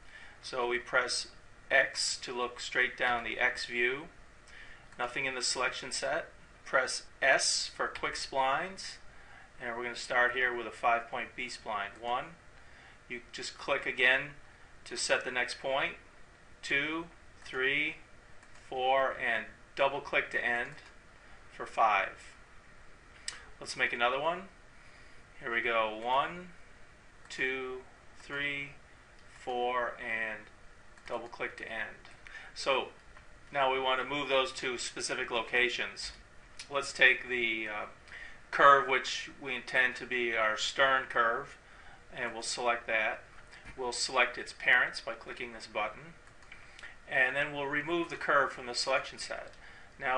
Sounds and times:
Speech: 0.4 - 4.2, 5.0 - 9.0, 9.6 - 12.4, 13.1 - 16.0, 16.6 - 18.0, 18.6 - 20.9, 21.5 - 22.4, 23.6 - 24.6, 25.4 - 26.6, 27.3 - 28.8, 29.4 - 30.5, 31.1 - 46.2, 47.1 - 50.1.

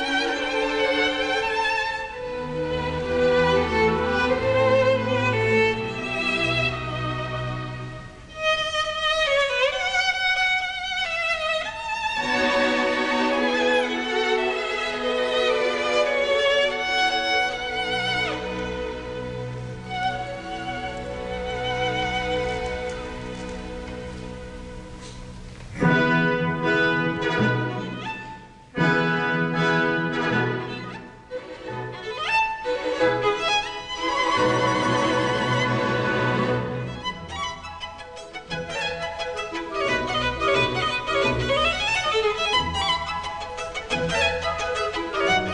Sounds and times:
Violin, fiddle: 0.0 - 45.5.

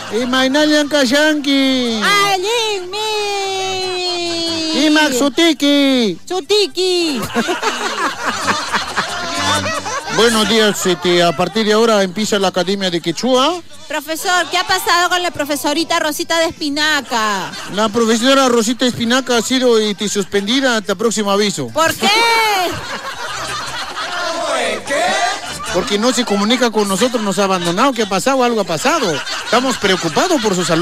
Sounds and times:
Music: 1.0 - 21.0, 21.8 - 30.8.

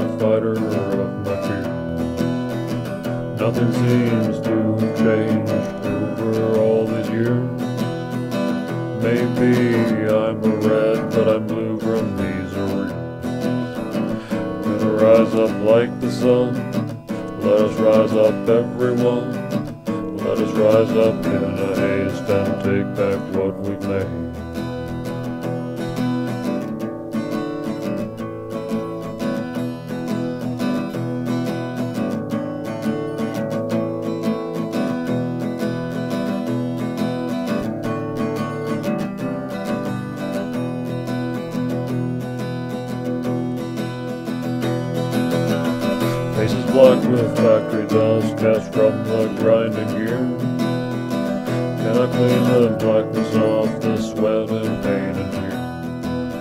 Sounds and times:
Acoustic guitar: 0.0 - 56.4.

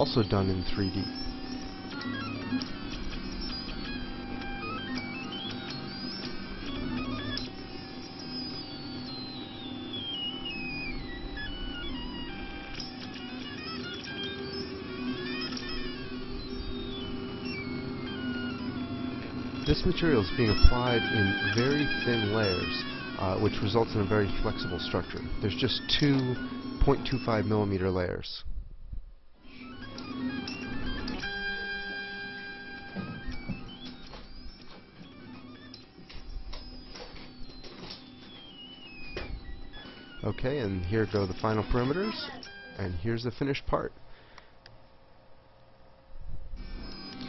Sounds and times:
Speech: 0.0 - 1.1, 19.7 - 28.5, 40.2 - 44.0.

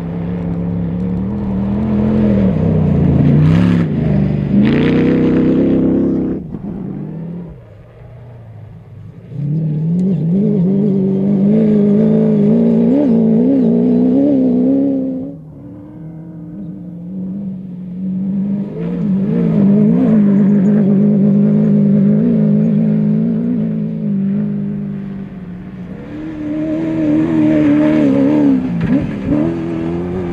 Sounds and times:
Outside, rural or natural: 0.0 - 30.3
Race car, auto racing: 0.0 - 30.3.

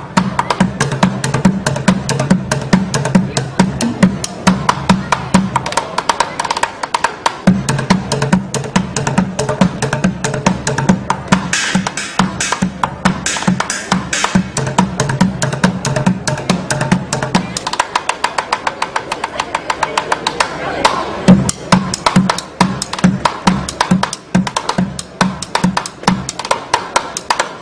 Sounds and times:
Music: 0.0 - 27.6
Speech: 3.1 - 7.1, 17.3 - 21.8.

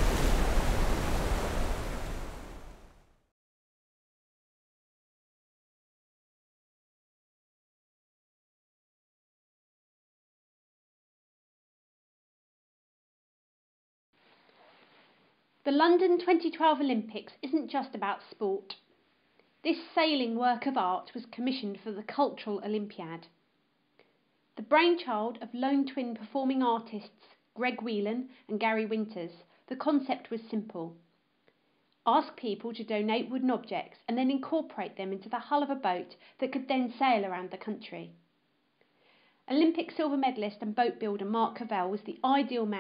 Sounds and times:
Speech: 15.7 - 18.8, 19.7 - 23.3, 24.6 - 31.0, 32.1 - 38.2, 39.5 - 42.8.

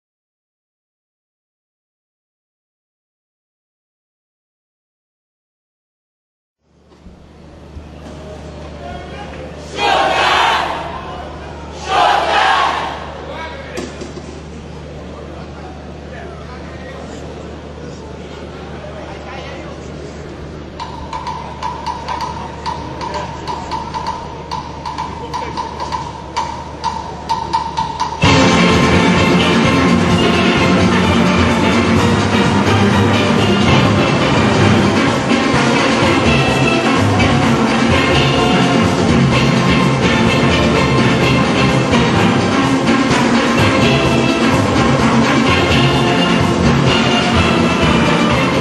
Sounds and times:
Exciting music: 28.1 - 48.6
Dance music: 28.2 - 48.6
Orchestra: 28.2 - 48.6.

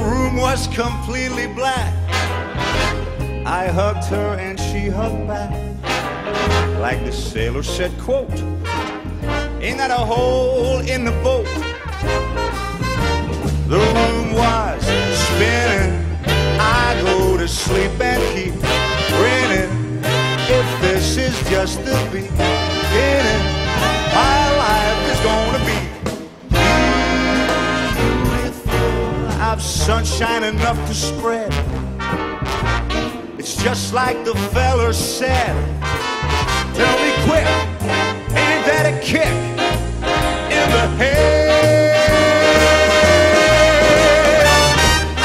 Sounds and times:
Swing music: 0.0 - 45.2.

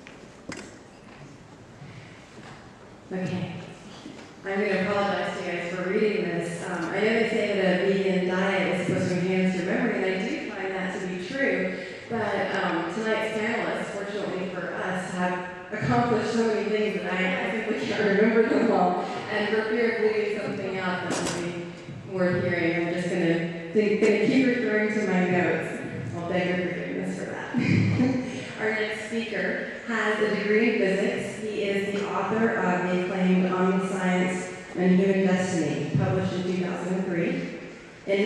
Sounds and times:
Female speech, woman speaking: 3.1 - 3.6, 4.4 - 37.5.

